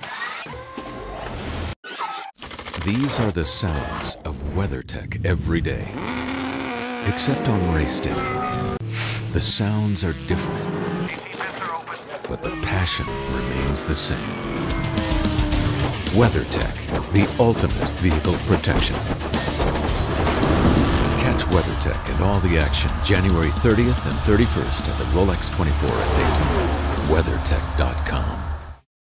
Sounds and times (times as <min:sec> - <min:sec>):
Speech: 0:02.8 - 0:06.0, 0:07.1 - 0:08.3, 0:09.3 - 0:14.4, 0:16.1 - 0:19.1, 0:21.2 - 0:28.5
Music: 0:13.0 - 0:28.8.